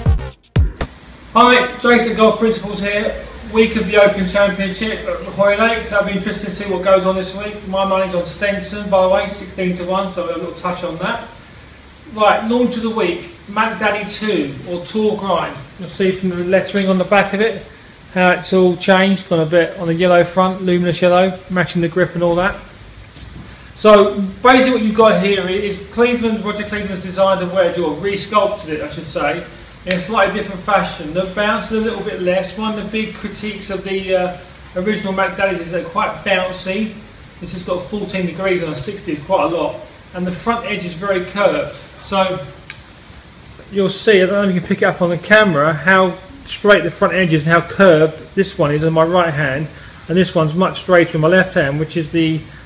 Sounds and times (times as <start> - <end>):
Speech: 1.4 - 11.4, 12.0 - 22.7, 23.8 - 42.6, 43.7 - 52.5.